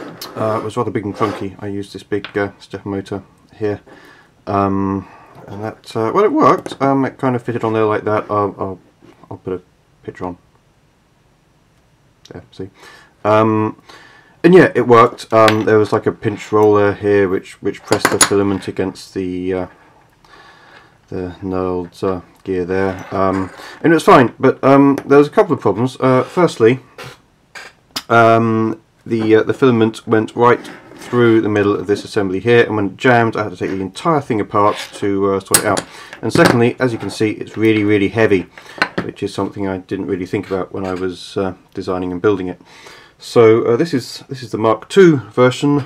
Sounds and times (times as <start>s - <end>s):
Speech: 0.2s - 3.9s, 4.5s - 10.4s, 12.3s - 13.8s, 14.4s - 19.8s, 21.1s - 26.9s, 28.1s - 42.6s, 43.2s - 45.8s.